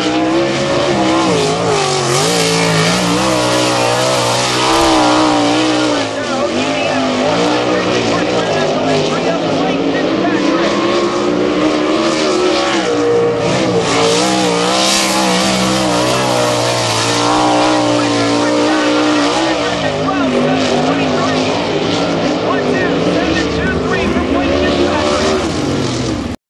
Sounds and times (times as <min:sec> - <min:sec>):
Speech: 0:04.6 - 0:11.2, 0:15.9 - 0:25.5.